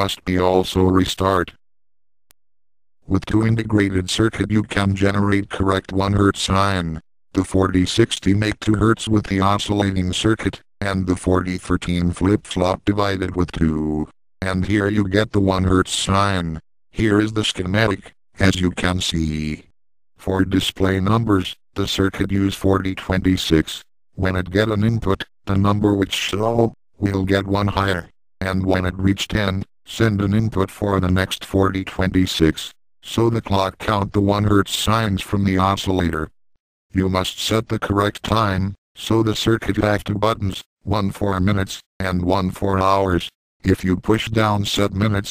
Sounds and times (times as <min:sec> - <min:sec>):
Speech: 0:00.0 - 0:01.6, 0:03.1 - 0:45.3.